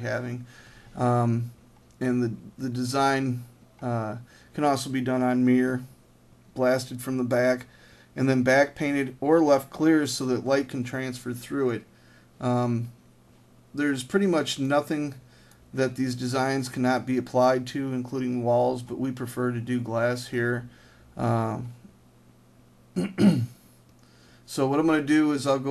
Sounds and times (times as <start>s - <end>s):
Speech: 0.0s - 5.9s, 6.6s - 13.0s, 13.8s - 21.8s, 24.5s - 25.7s.